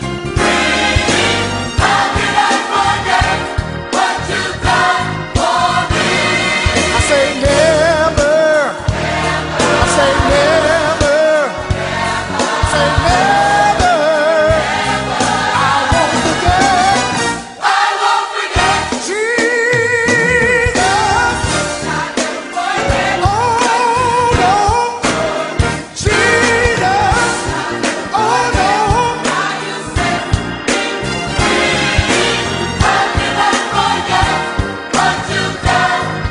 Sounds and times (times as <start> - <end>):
Exciting music: 0.0 - 36.3
Rhythm and blues: 0.0 - 36.3
Choir: 0.4 - 36.3.